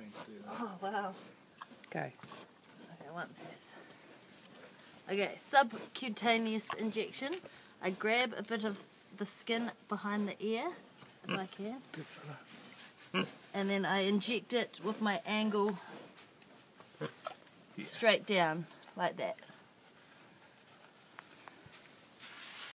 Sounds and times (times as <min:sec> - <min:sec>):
Oink: 0:11.3 - 0:11.5, 0:13.1 - 0:13.4.